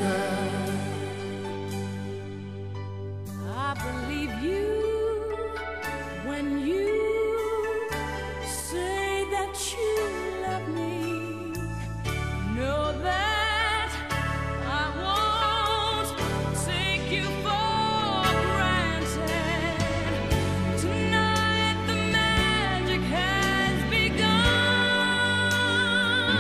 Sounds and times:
Music: 0.0 - 26.4.

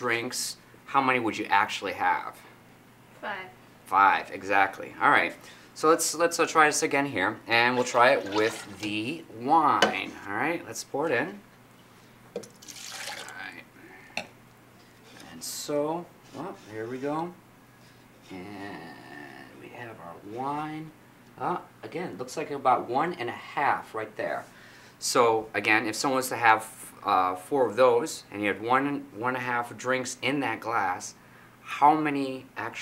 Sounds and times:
Inside, small room: 0.0 - 32.8
Speech: 3.2 - 11.4, 15.2 - 17.4, 18.3 - 32.8.

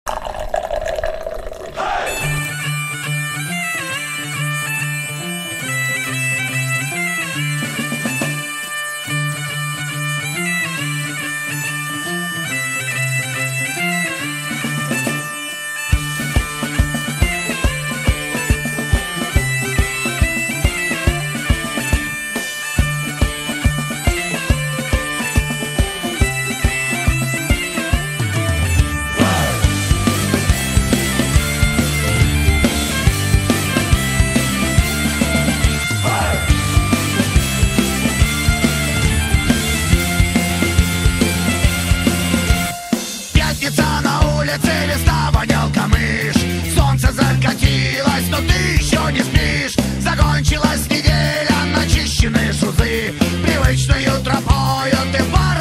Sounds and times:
Music: 2.0 - 55.6.

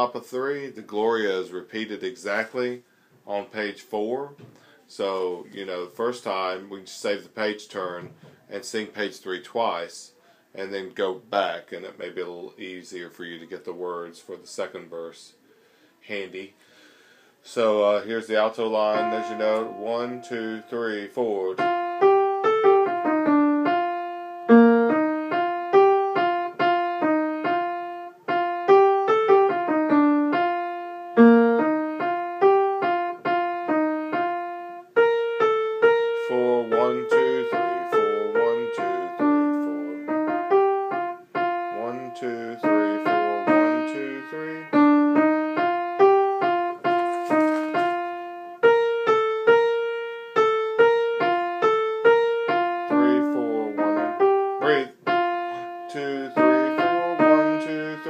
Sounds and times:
Speech: 0.0 - 15.4, 16.0 - 16.6, 17.4 - 21.6, 36.2 - 40.1, 41.8 - 44.8, 53.0 - 53.8, 54.6 - 55.0, 55.9 - 58.0
Music: 18.8 - 20.9, 21.6 - 58.0.

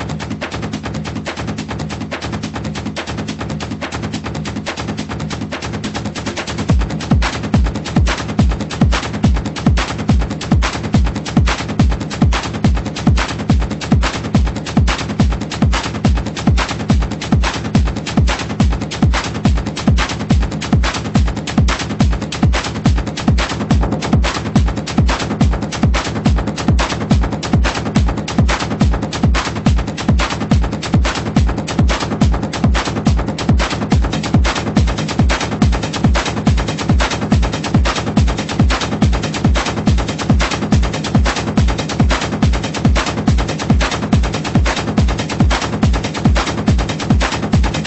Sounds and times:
Techno: 0.0 - 47.8.

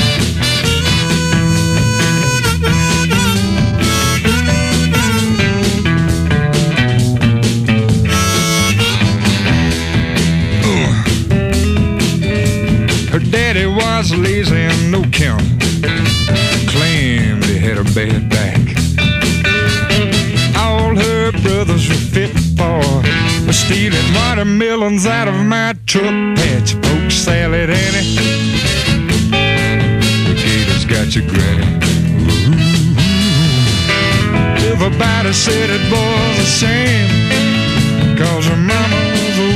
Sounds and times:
Rock music: 0.0 - 39.5.

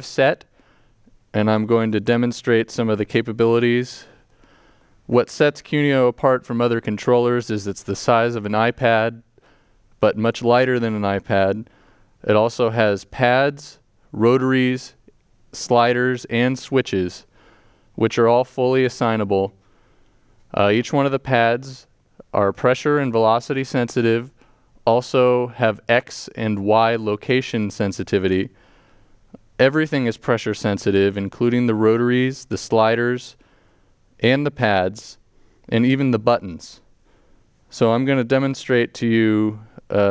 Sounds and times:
Speech: 0.0 - 0.5, 1.3 - 4.2, 5.1 - 9.3, 10.0 - 17.3, 18.0 - 19.6, 20.5 - 28.6, 29.6 - 33.4, 34.2 - 36.9, 37.7 - 40.1.

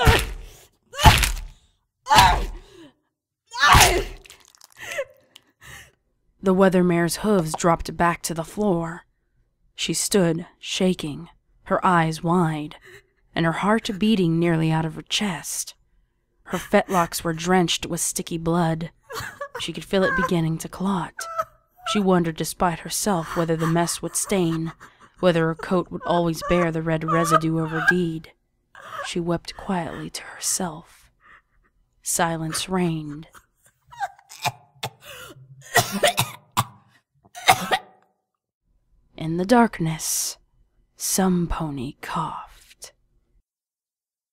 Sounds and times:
Speech: 6.4 - 9.1, 9.8 - 15.8, 16.5 - 31.1, 32.0 - 33.4, 39.2 - 40.4, 41.0 - 43.0.

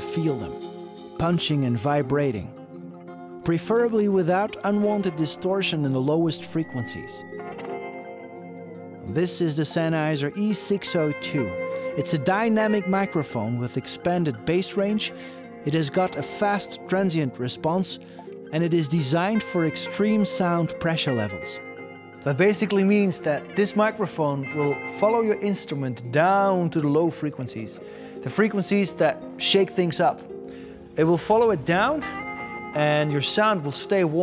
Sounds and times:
Speech: 0.0 - 0.6, 1.2 - 2.5, 3.4 - 7.3, 9.1 - 21.6, 22.2 - 30.2, 31.0 - 32.1, 32.8 - 34.2
Musical instrument: 0.0 - 34.2.

